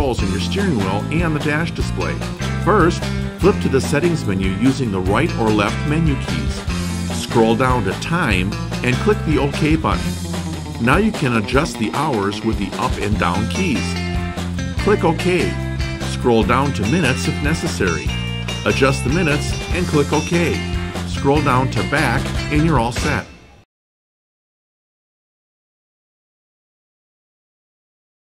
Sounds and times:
Speech: 0:00.0 - 0:10.2, 0:10.8 - 0:14.0, 0:14.8 - 0:23.4
Music: 0:00.0 - 0:23.7.

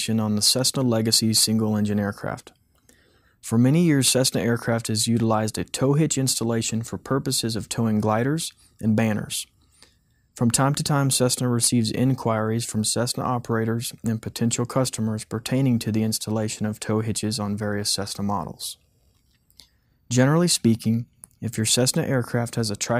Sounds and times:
Speech: 0:00.0 - 0:02.6, 0:03.4 - 0:09.6, 0:10.4 - 0:18.8, 0:20.1 - 0:22.9.

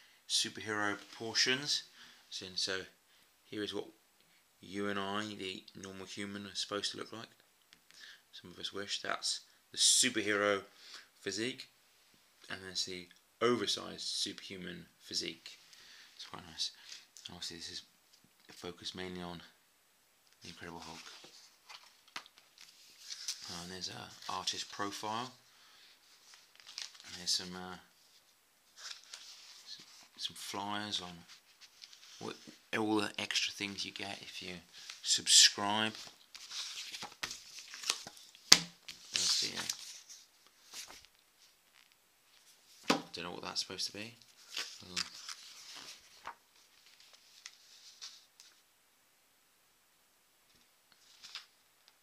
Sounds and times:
Speech: 0:00.3 - 0:04.0, 0:04.6 - 0:07.4, 0:08.3 - 0:11.7, 0:12.5 - 0:15.6, 0:16.2 - 0:17.9, 0:18.5 - 0:19.6, 0:20.4 - 0:21.1, 0:23.4 - 0:25.4, 0:27.0 - 0:27.9, 0:29.7 - 0:31.3, 0:32.2 - 0:36.0, 0:39.1 - 0:39.8, 0:43.1 - 0:44.2, 0:44.8 - 0:45.1.

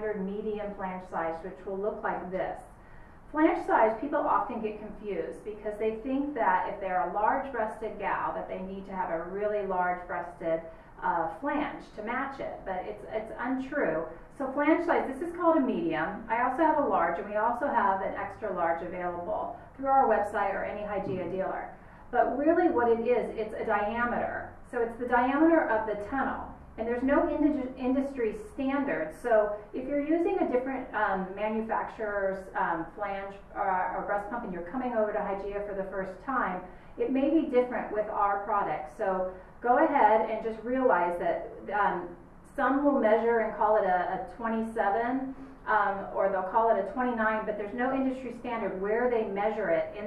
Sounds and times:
Speech: 0:00.0 - 0:50.0.

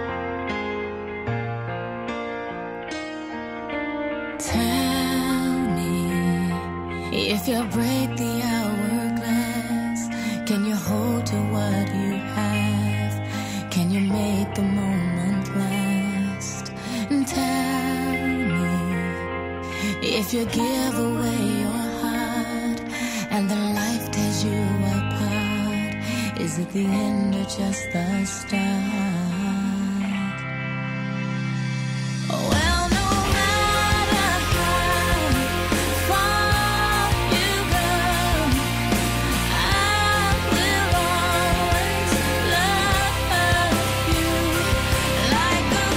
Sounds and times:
Music: 0:00.0 - 0:45.9.

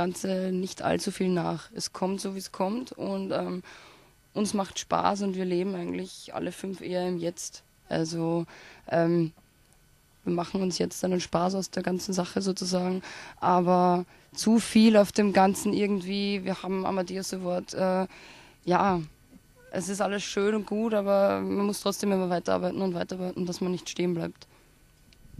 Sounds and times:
Speech: 0:00.0 - 0:03.7, 0:04.4 - 0:09.4, 0:10.3 - 0:18.1, 0:18.7 - 0:19.1, 0:19.7 - 0:24.5.

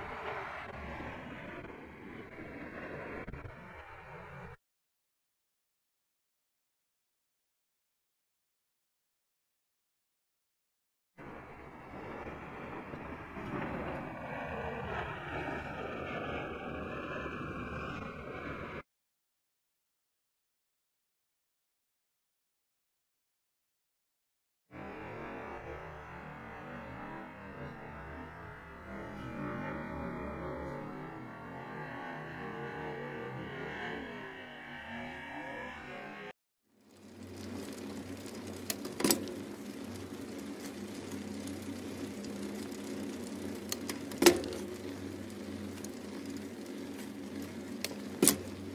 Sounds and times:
Bicycle: 0:00.0 - 0:04.6, 0:11.2 - 0:18.8, 0:24.8 - 0:48.7.

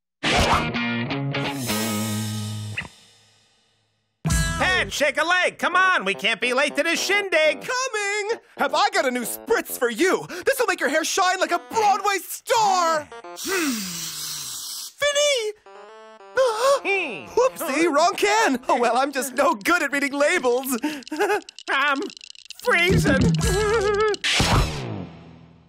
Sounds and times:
Music: 0:00.2 - 0:13.5, 0:15.5 - 0:19.6
Speech: 0:04.6 - 0:13.1, 0:15.0 - 0:15.6, 0:16.4 - 0:20.8, 0:21.7 - 0:23.8.

